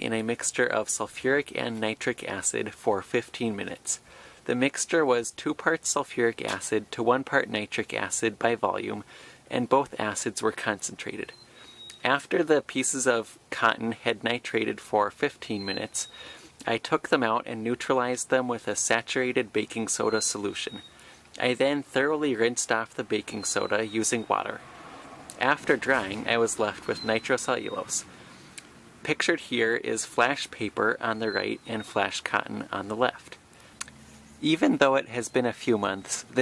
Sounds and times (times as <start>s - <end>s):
Speech: 0.0s - 11.3s, 12.0s - 20.8s, 21.4s - 24.6s, 25.4s - 28.1s, 29.0s - 33.4s, 34.4s - 36.4s.